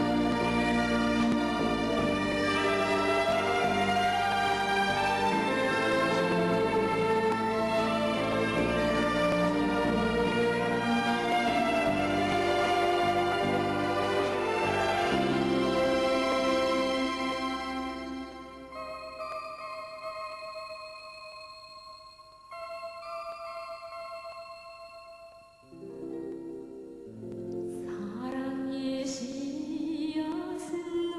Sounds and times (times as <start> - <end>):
Tender music: 0.0 - 31.1.